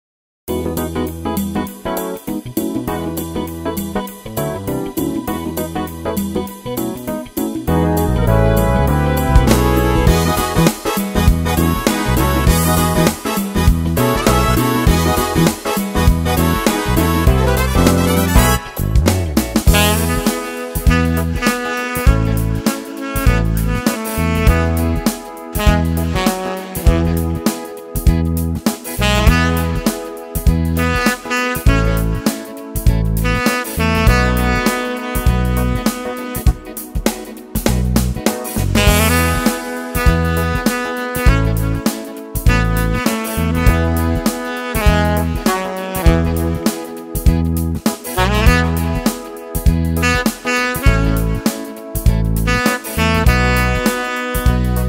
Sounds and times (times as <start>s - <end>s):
Music: 0.5s - 54.8s.